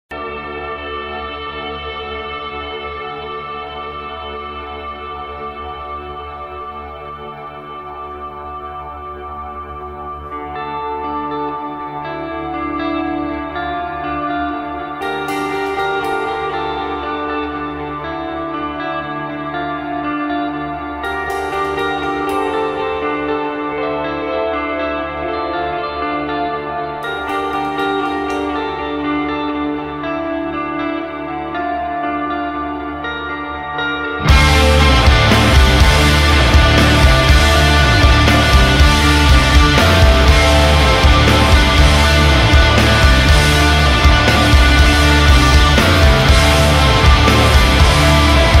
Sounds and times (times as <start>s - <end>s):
Ambient music: 0.1s - 48.6s.